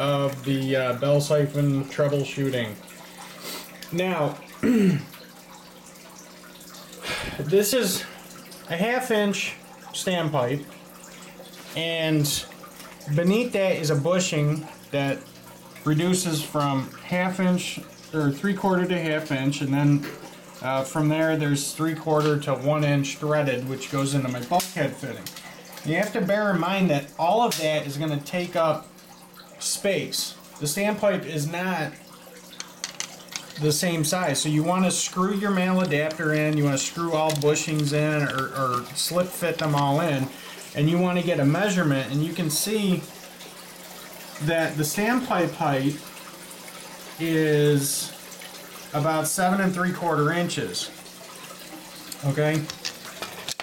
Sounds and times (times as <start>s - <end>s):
Speech: 0.0s - 2.8s, 3.9s - 4.4s, 7.4s - 8.1s, 8.7s - 10.7s, 11.8s - 12.5s, 13.1s - 15.2s, 15.9s - 28.9s, 29.6s - 32.0s, 33.6s - 43.1s, 44.4s - 46.0s, 47.2s - 48.2s, 48.9s - 51.0s, 52.2s - 52.7s.